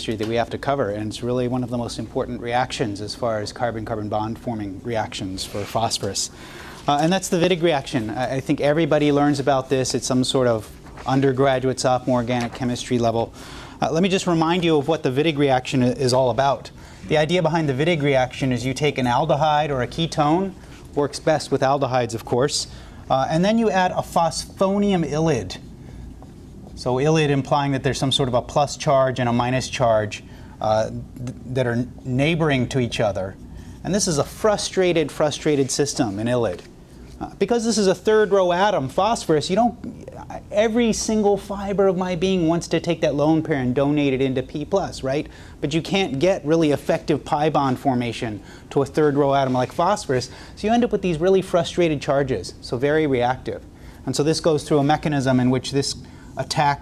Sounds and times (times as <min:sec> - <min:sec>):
Speech: 0:00.0 - 0:25.7, 0:26.8 - 0:56.8.